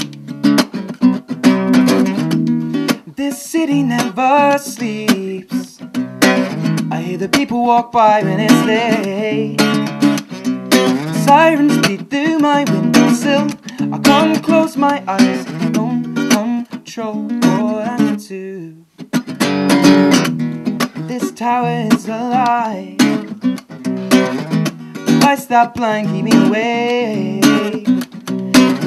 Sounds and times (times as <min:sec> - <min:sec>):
Music: 0:00.0 - 0:28.8.